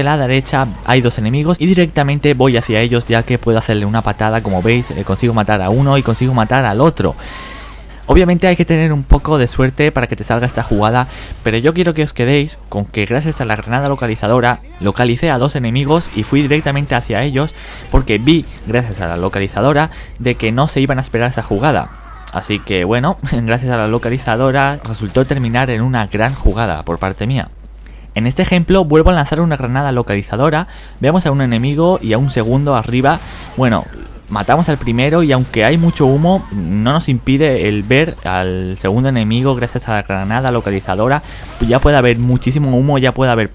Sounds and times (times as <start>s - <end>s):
Speech: 0.0s - 7.2s, 8.1s - 27.5s, 28.2s - 43.5s.